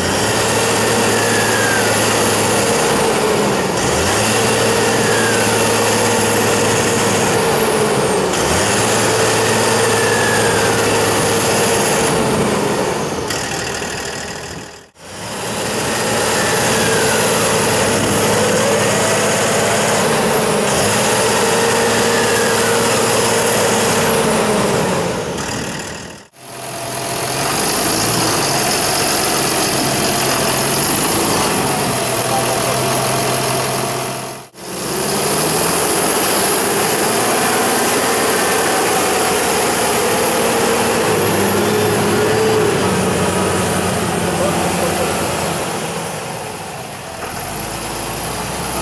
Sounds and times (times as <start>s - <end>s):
Engine knocking: 13.3s - 15.0s, 25.4s - 42.0s
Speech: 31.4s - 33.3s, 44.2s - 45.4s.